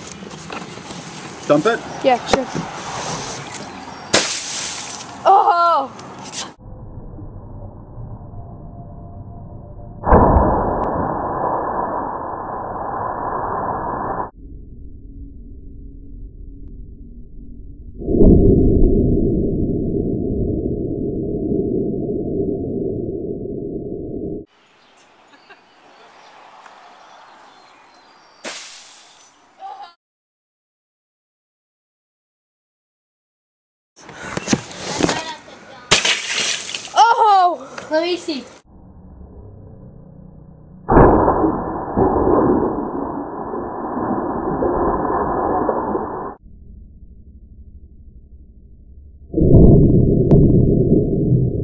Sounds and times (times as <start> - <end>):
Speech: 5.3 - 5.9, 35.1 - 35.9, 37.0 - 38.5.